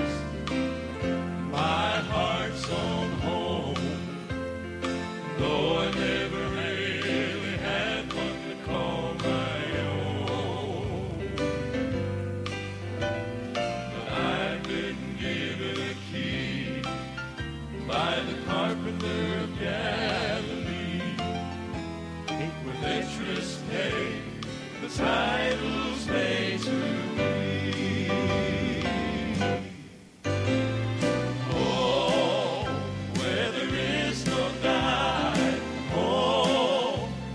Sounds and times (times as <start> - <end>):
Choir: 0.0 - 12.3, 13.8 - 37.3.